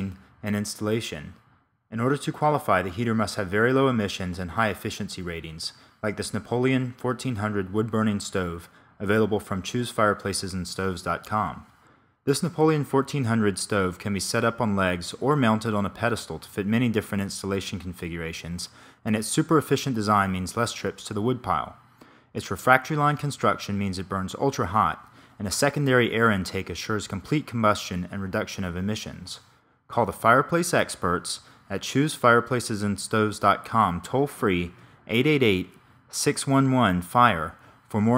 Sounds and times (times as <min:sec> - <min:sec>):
Speech: 0:00.0 - 0:38.1.